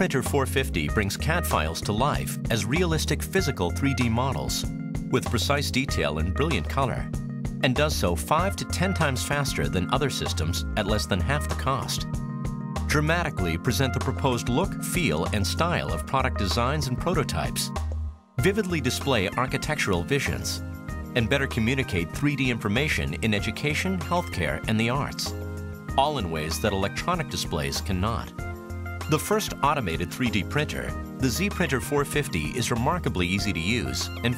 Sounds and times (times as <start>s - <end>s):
Speech: 0.0s - 12.1s, 12.9s - 17.8s, 18.4s - 20.6s, 21.2s - 25.3s, 26.0s - 28.3s, 29.1s - 34.3s
Music: 0.0s - 34.3s.